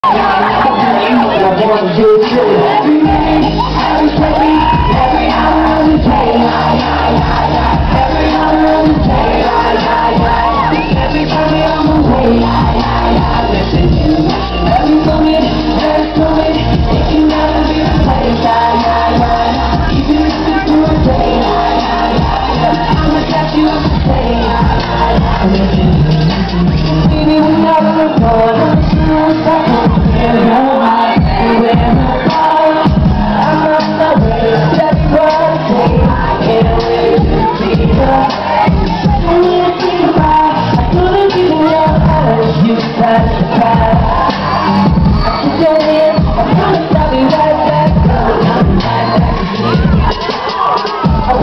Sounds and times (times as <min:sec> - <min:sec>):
Crowd: 0:00.0 - 0:51.4
Pop music: 0:00.0 - 0:51.4
Singing: 0:00.0 - 0:51.4.